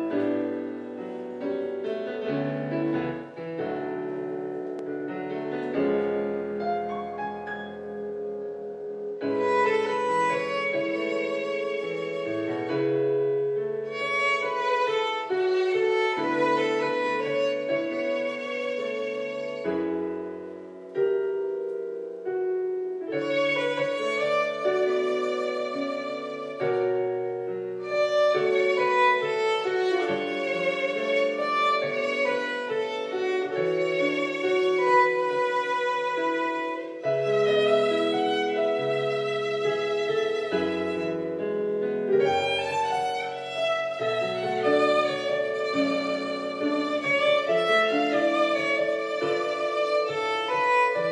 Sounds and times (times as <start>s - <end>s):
Violin, fiddle: 9.2s - 21.0s, 23.0s - 51.1s.